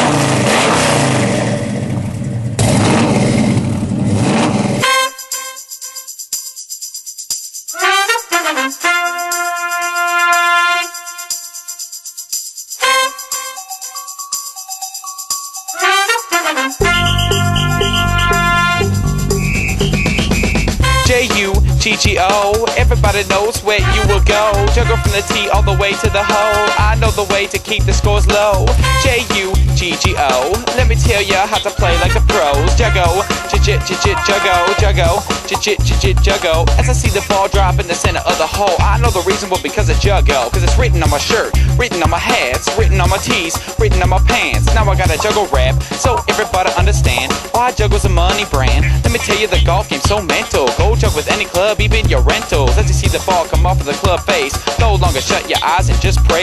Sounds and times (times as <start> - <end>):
Exciting music: 15.7 - 56.4.